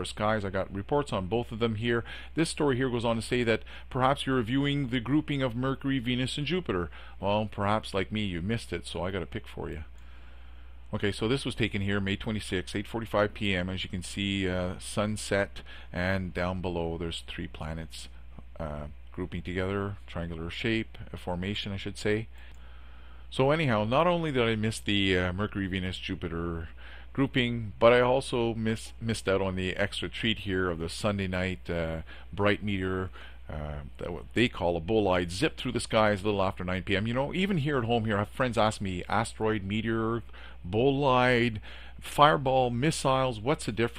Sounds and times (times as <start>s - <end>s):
Speech: 0.0s - 9.9s, 10.9s - 22.4s, 23.3s - 43.9s.